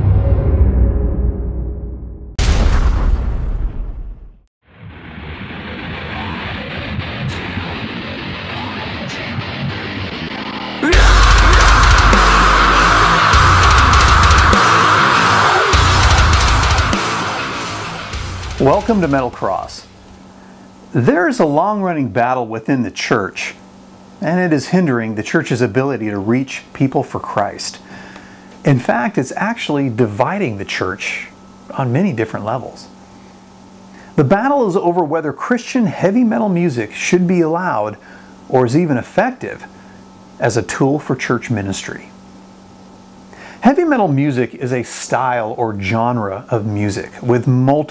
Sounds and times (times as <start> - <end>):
Speech: 18.6 - 19.9, 20.9 - 23.6, 24.2 - 27.8, 28.6 - 33.0, 34.2 - 39.7, 40.4 - 42.2, 43.6 - 47.9.